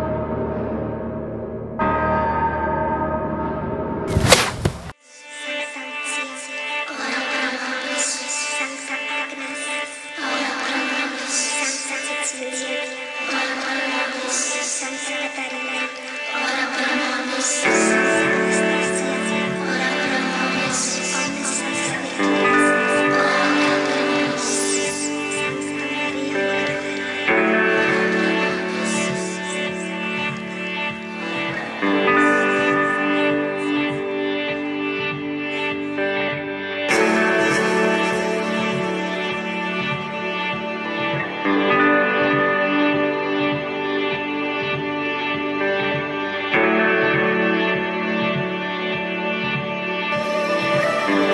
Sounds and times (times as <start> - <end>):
Music: 0.0 - 4.4, 5.0 - 51.3.